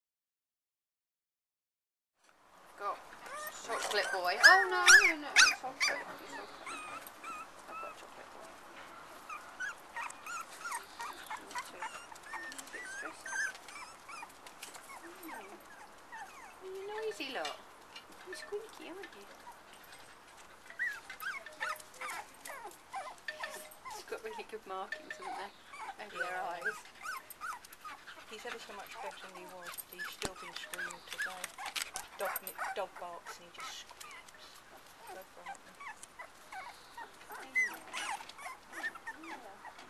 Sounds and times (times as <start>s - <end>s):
Whimper (dog): 3.3s - 8.0s, 9.3s - 17.2s, 20.6s - 39.8s.